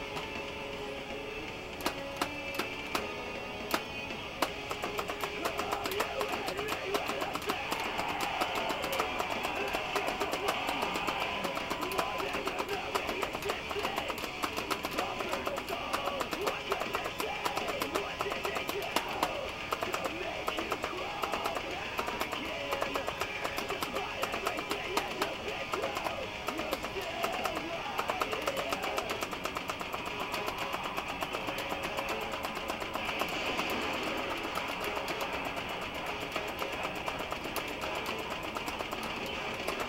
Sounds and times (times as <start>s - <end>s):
Guitar: 0.0s - 39.8s.